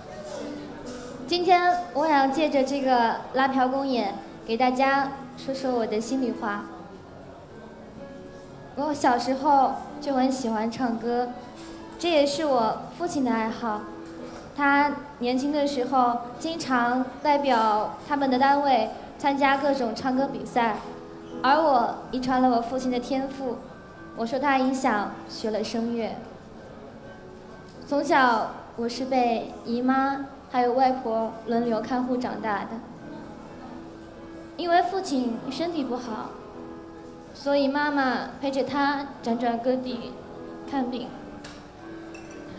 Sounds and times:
Female speech, woman speaking: 1.3 - 6.8, 8.8 - 11.4, 12.0 - 13.9, 14.6 - 23.6, 24.2 - 26.3, 27.9 - 32.9, 34.6 - 36.4, 37.4 - 41.2.

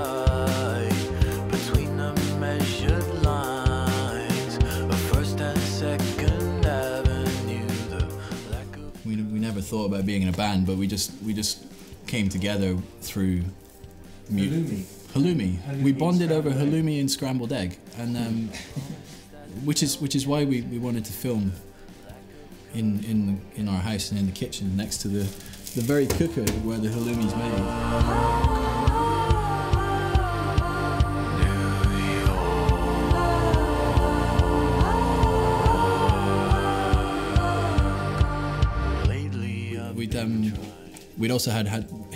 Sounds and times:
Music: 0.0 - 42.1
Speech: 8.7 - 13.6, 14.3 - 27.7, 39.2 - 42.1.

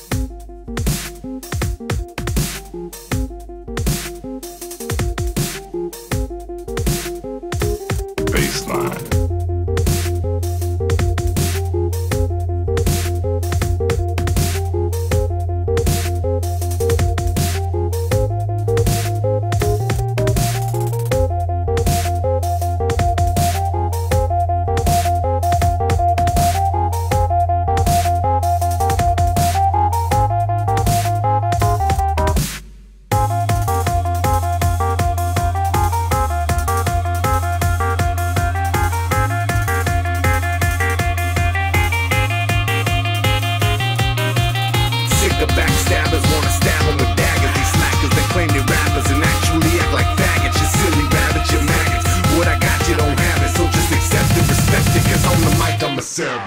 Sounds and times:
Music: 0.0 - 56.4.

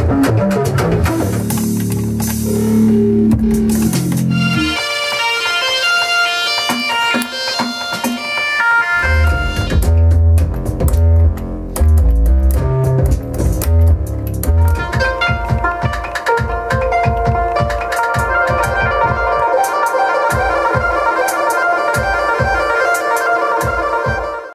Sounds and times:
Sampler: 0.7 - 24.3.

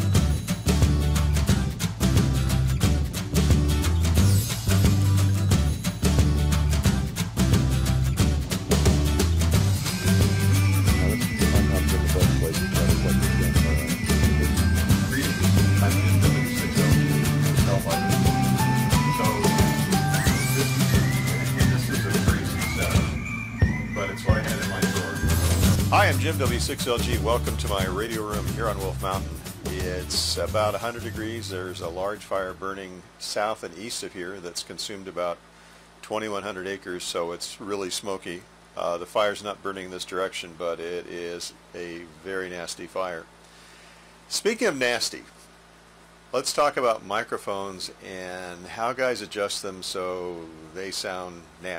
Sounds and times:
Music: 0.0 - 32.0
Speech: 10.8 - 23.1, 24.0 - 25.2, 25.9 - 35.4, 36.0 - 43.3, 44.3 - 45.4, 46.3 - 51.7.

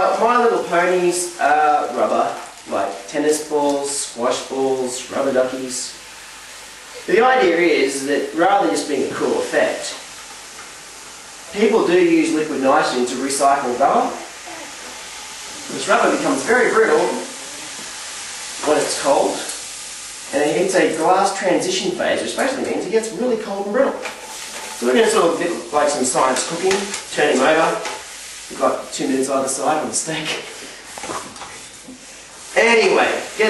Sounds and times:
Speech: 0.0 - 6.0, 7.0 - 10.0, 11.5 - 14.7, 15.7 - 17.7, 18.6 - 19.6, 20.3 - 24.0, 24.8 - 30.5, 32.6 - 33.5
Spray: 14.9 - 22.6, 24.1 - 33.5.

